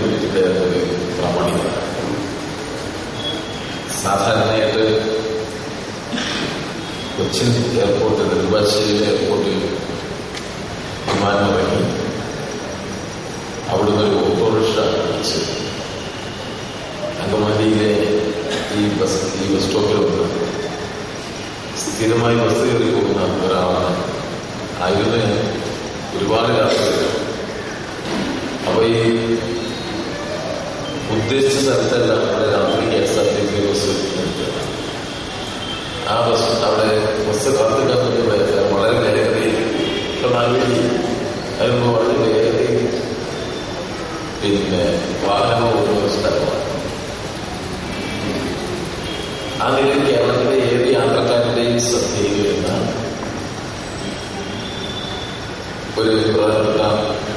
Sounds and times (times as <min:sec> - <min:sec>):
Male speech, man speaking: 0:00.0 - 0:02.0, 0:03.9 - 0:05.3, 0:07.2 - 0:09.8, 0:11.1 - 0:12.1, 0:13.7 - 0:15.6, 0:17.1 - 0:20.5, 0:21.8 - 0:24.1, 0:24.8 - 0:25.6, 0:26.2 - 0:27.3, 0:28.6 - 0:29.5, 0:31.1 - 0:34.7, 0:36.0 - 0:43.1, 0:44.4 - 0:46.8, 0:49.6 - 0:53.0, 0:56.0 - 0:57.3.